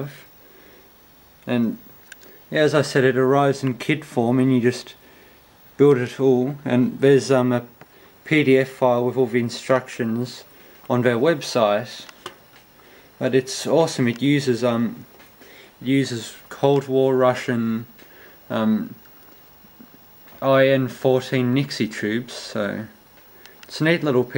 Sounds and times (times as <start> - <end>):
Speech: 0.0 - 0.3, 1.4 - 1.9, 2.5 - 5.0, 5.8 - 12.2, 13.2 - 15.1, 15.8 - 19.0, 20.4 - 23.0, 23.7 - 24.3.